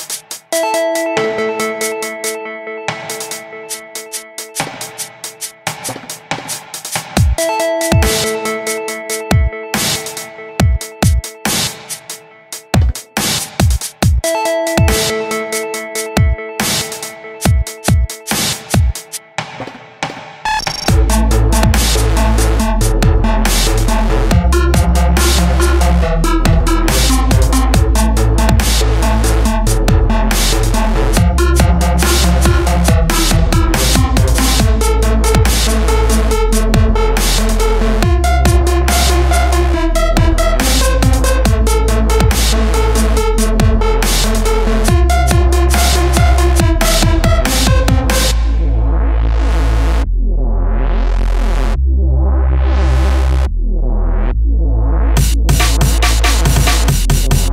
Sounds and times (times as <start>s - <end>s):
Music: 0.0s - 57.5s.